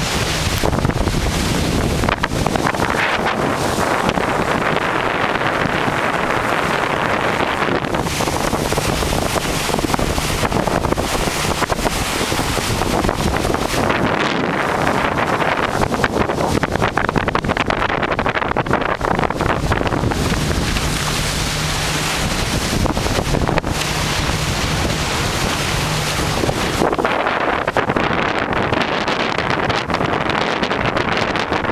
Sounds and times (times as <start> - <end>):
Boat, Water vehicle: 0.0 - 31.7.